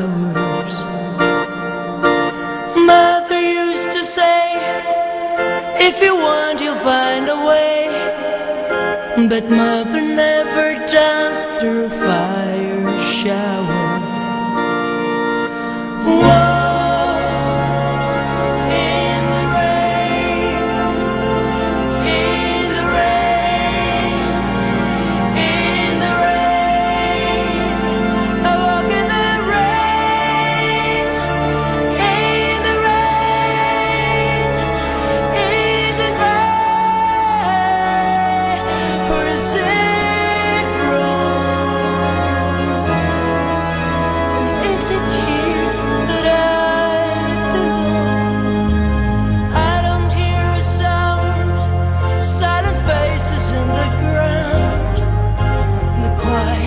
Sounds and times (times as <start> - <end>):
Music: 0.0 - 56.6.